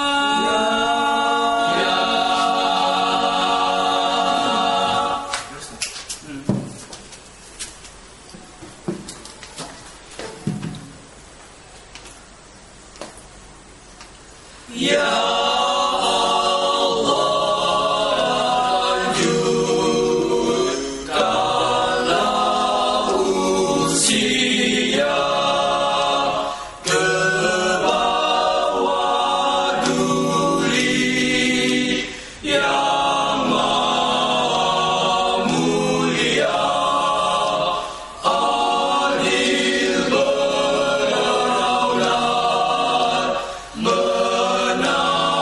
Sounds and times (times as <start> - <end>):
Choir: 0.0 - 5.6, 14.6 - 45.4
A capella: 0.0 - 6.6, 14.4 - 45.4.